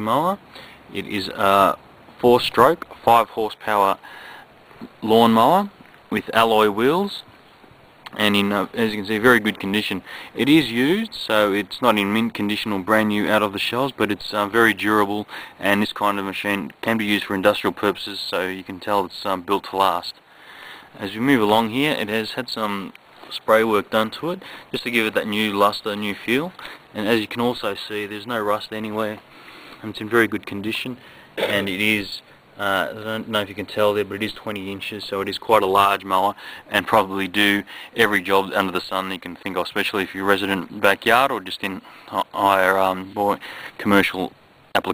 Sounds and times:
Speech: 0.0s - 4.0s, 4.8s - 7.3s, 8.1s - 20.2s, 21.0s - 29.2s, 29.8s - 44.9s.

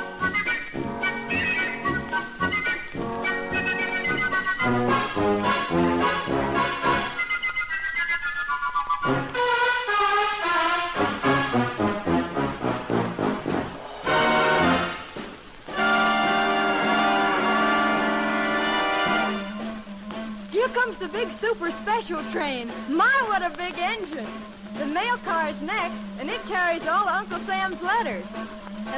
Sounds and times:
Music: 0.0s - 28.9s.

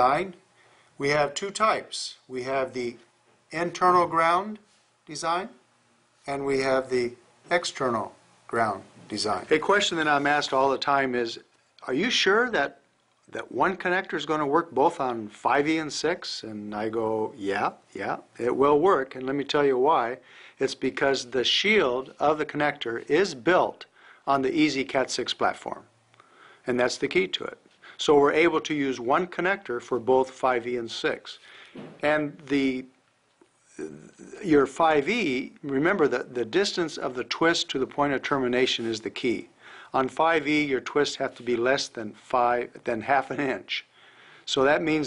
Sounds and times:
Speech: 0.0s - 0.4s, 1.0s - 5.6s, 6.2s - 25.9s, 26.7s - 31.4s, 32.0s - 33.0s, 33.7s - 43.9s, 44.5s - 45.0s.

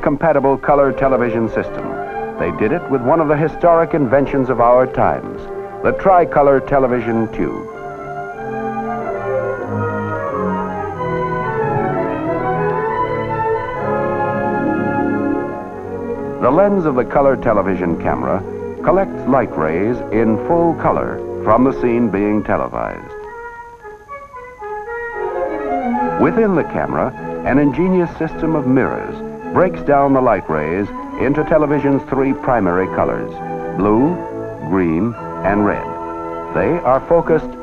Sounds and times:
Speech: 0.0s - 7.6s, 16.4s - 23.2s, 26.2s - 36.0s, 36.6s - 37.6s
Music: 0.0s - 37.6s.

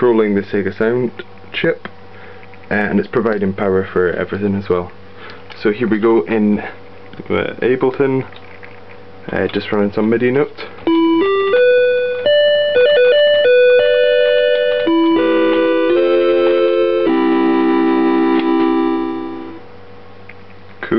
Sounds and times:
Music: 10.9s - 19.6s.

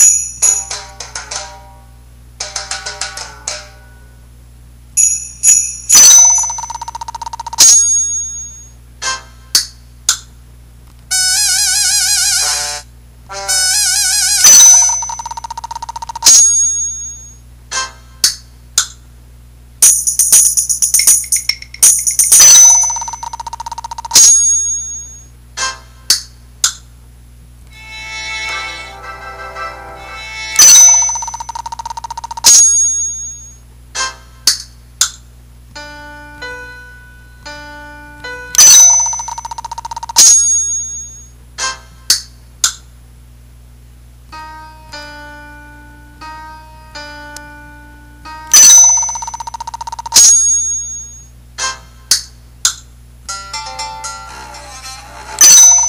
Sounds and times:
Music: 0.4s - 4.2s, 12.2s - 14.4s, 27.7s - 31.0s, 35.8s - 38.6s, 44.3s - 48.6s, 53.3s - 55.6s.

